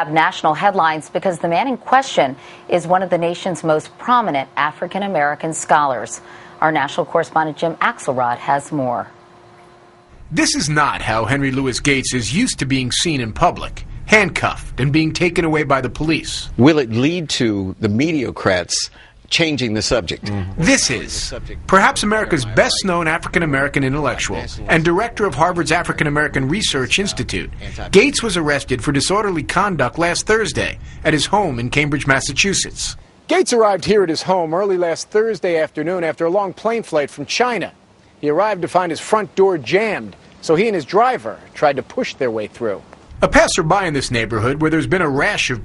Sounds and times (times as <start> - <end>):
Speech: 0.0 - 9.1, 10.4 - 45.6.